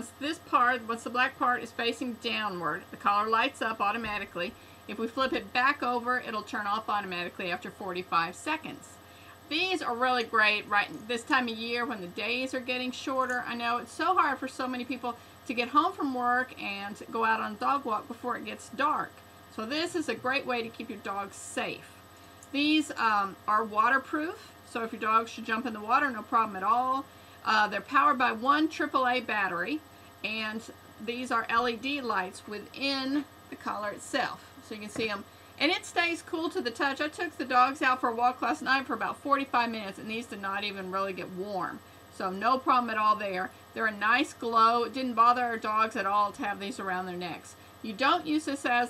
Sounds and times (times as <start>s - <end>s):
Speech: 0.0s - 21.9s, 22.5s - 48.8s.